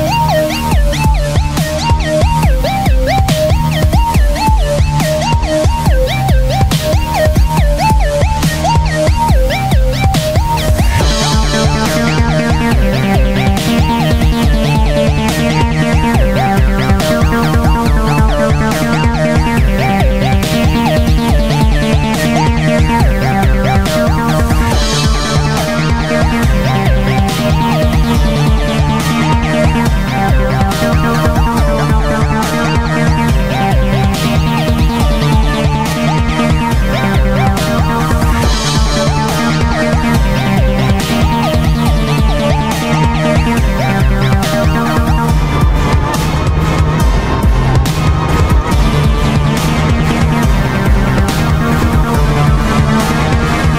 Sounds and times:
Dubstep: 0.0s - 53.7s.

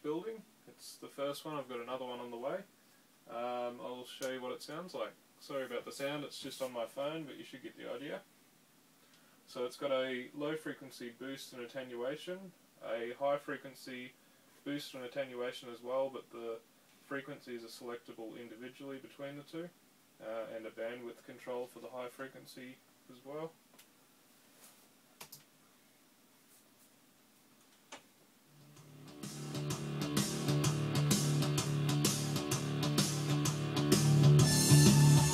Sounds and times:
Speech: 0.0s - 2.7s, 3.3s - 8.3s, 9.5s - 23.6s
Music: 28.6s - 35.3s.

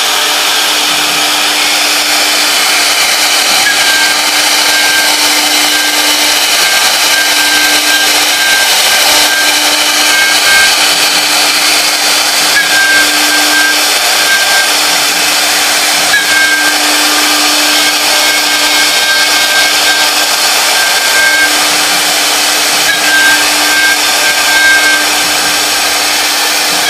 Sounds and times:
Wood: 0.0s - 26.8s
Tools: 0.4s - 26.8s.

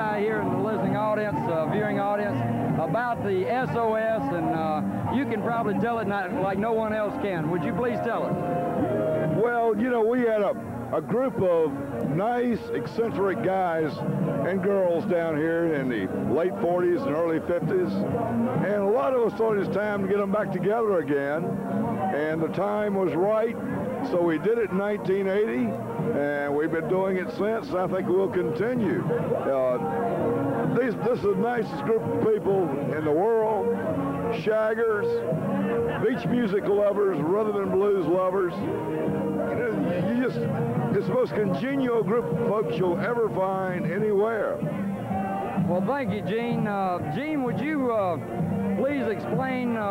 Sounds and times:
Speech: 0.0s - 8.4s, 9.3s - 29.9s, 30.7s - 38.7s, 39.4s - 44.6s, 45.6s - 48.2s, 48.8s - 49.9s
Music: 0.0s - 49.9s.

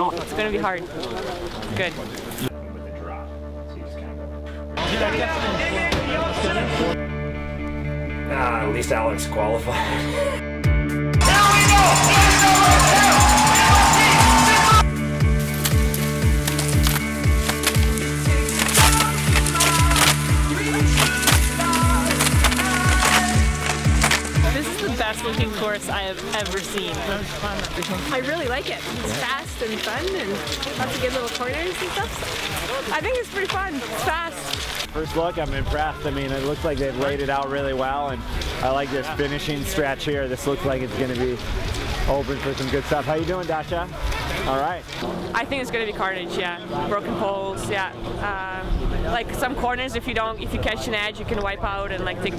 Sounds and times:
Music: 2.3s - 52.3s.

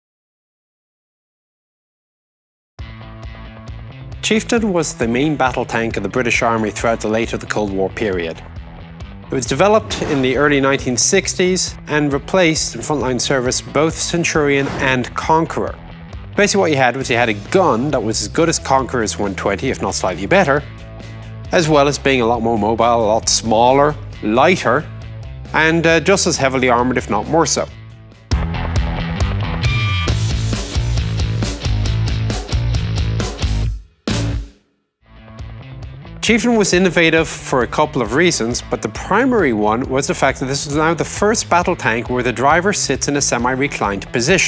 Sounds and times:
Music: 2.8s - 44.4s
Speech: 4.2s - 8.4s, 9.3s - 15.8s, 16.4s - 20.7s, 21.5s - 24.9s, 25.5s - 27.8s, 36.2s - 44.4s.

